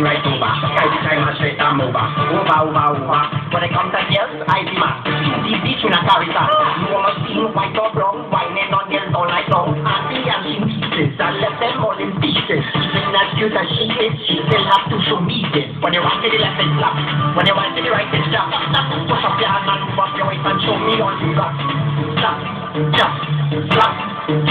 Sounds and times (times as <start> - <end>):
Music: 0.0 - 24.5.